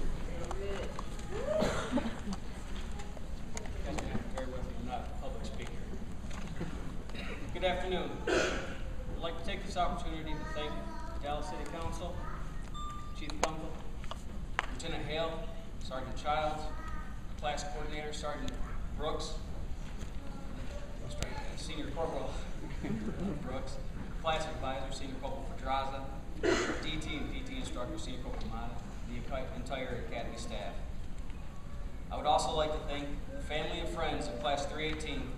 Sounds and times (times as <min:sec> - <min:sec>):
Narration, monologue: 0:03.0 - 0:35.3
Male speech, man speaking: 0:03.8 - 0:05.9, 0:07.5 - 0:08.2, 0:09.2 - 0:12.2, 0:13.2 - 0:13.8, 0:14.7 - 0:16.8, 0:17.4 - 0:19.4, 0:21.1 - 0:22.5, 0:23.4 - 0:26.2, 0:26.8 - 0:30.9, 0:32.1 - 0:35.3.